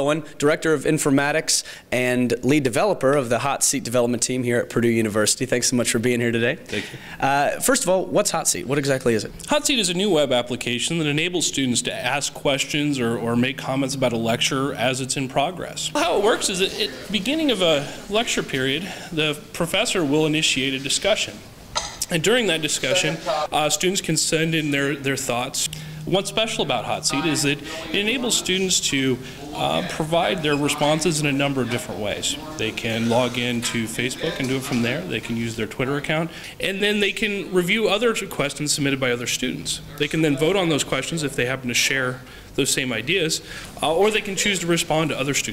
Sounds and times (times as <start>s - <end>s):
Speech: 0.0s - 21.4s, 22.0s - 45.5s.